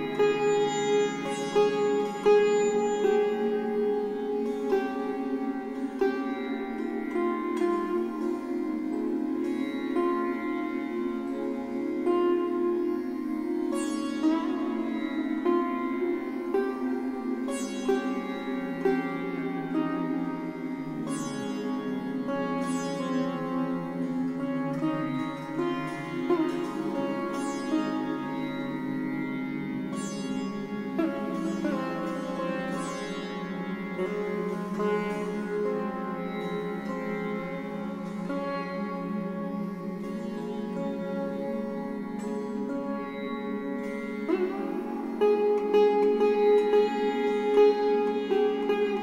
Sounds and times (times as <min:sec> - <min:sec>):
Sitar: 0:00.0 - 0:49.0.